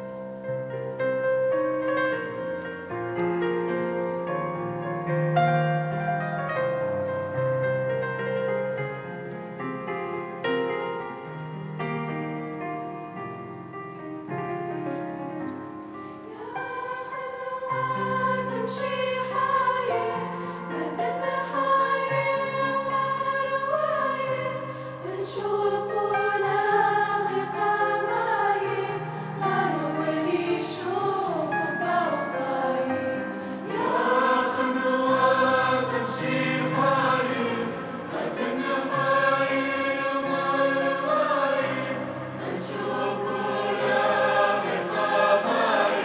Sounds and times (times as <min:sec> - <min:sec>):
Music: 0:00.0 - 0:46.0.